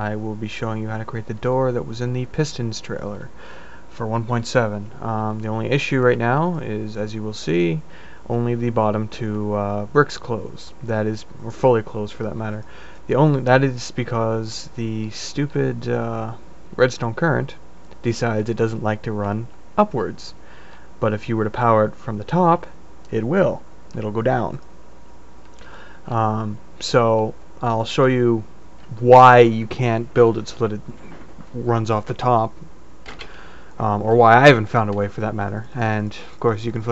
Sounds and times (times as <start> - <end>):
Speech: 0.0 - 20.4, 21.0 - 24.6, 26.1 - 32.7, 33.8 - 36.9.